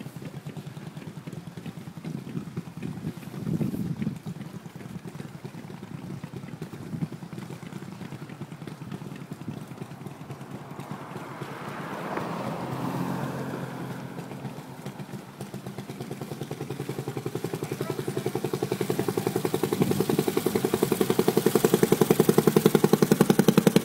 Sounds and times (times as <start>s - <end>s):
Motorboat, speedboat: 0.0s - 23.8s
Outside, urban or manmade: 0.0s - 23.8s
Speech: 17.5s - 19.5s.